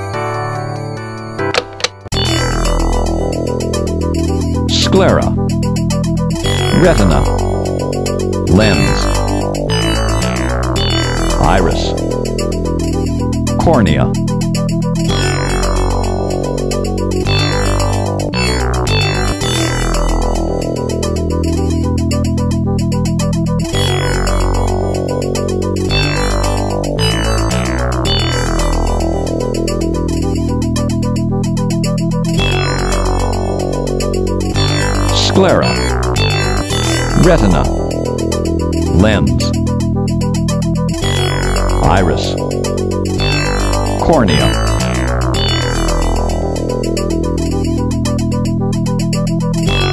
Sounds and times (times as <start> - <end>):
Music: 0.0 - 49.9
Speech: 4.7 - 5.4, 6.7 - 7.3, 8.5 - 9.1, 11.4 - 12.0, 13.6 - 14.2, 35.2 - 35.8, 37.2 - 37.7, 39.0 - 39.6, 41.8 - 42.4, 44.0 - 44.6.